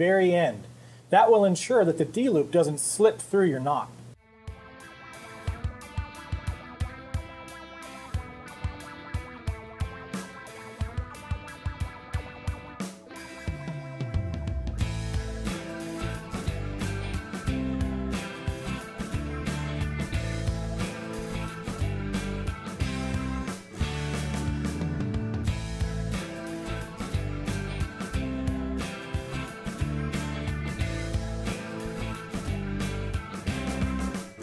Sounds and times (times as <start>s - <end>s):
Music: 4.2s - 34.4s.